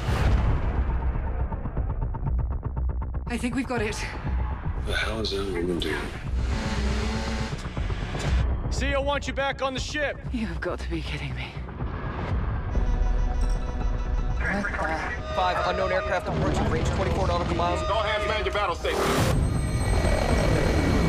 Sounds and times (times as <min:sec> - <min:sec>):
Music: 0:00.0 - 0:21.0.